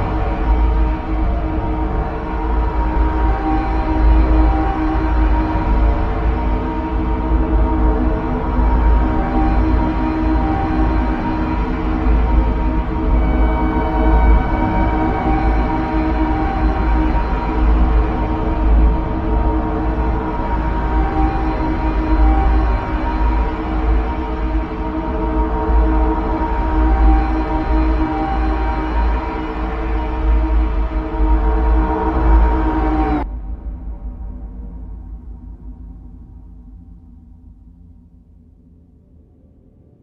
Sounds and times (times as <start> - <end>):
Ambient music: 0.0 - 40.0.